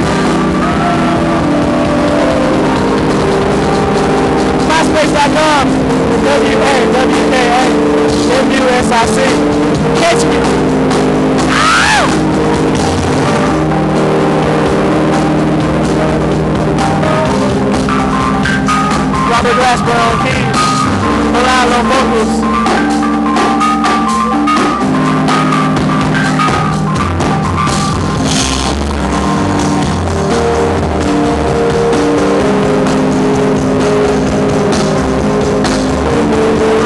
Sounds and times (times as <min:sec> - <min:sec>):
Jazz: 0:00.0 - 0:36.8
Speech: 0:04.7 - 0:09.4, 0:19.3 - 0:20.6, 0:21.4 - 0:22.4.